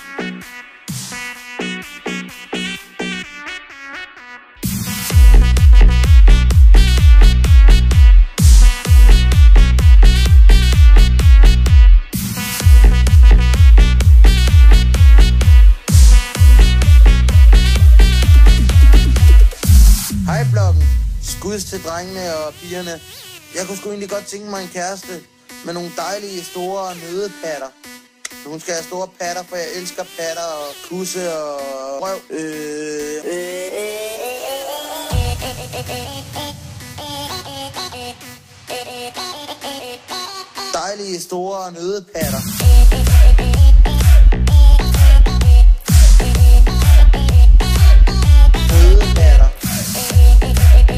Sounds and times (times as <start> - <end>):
Music: 0.0 - 50.9
Speech: 20.2 - 23.0, 23.6 - 27.7, 28.5 - 33.4, 40.8 - 42.5, 48.7 - 49.6.